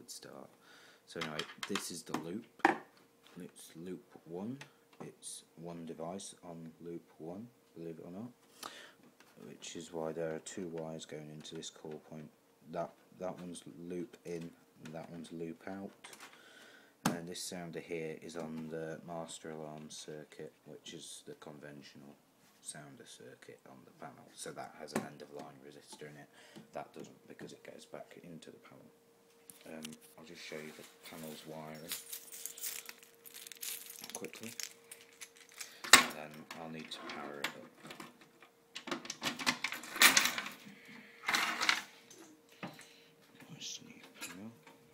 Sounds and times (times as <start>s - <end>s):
Speech: 0.0s - 2.5s, 3.3s - 8.4s, 9.4s - 16.2s, 17.1s - 28.9s, 29.6s - 32.0s, 34.0s - 34.6s, 36.0s - 37.8s, 43.4s - 44.6s.